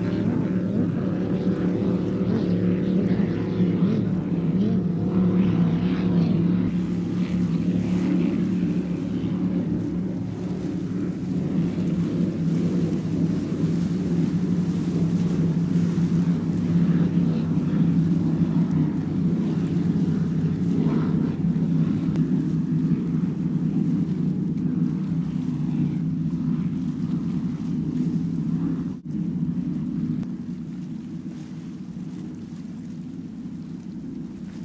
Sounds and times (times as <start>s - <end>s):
Motorboat, speedboat: 0.0s - 34.6s
Outside, rural or natural: 0.0s - 34.6s.